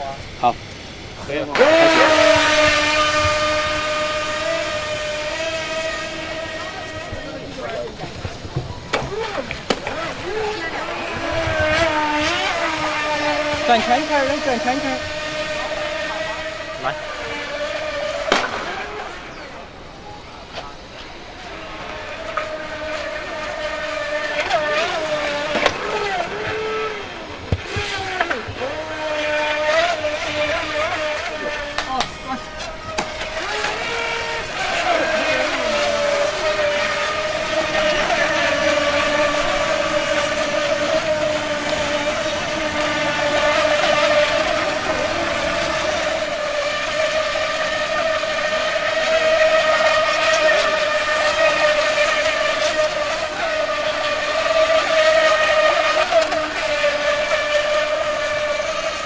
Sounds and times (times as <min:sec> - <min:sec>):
Motorboat, speedboat: 0:00.0 - 0:59.0.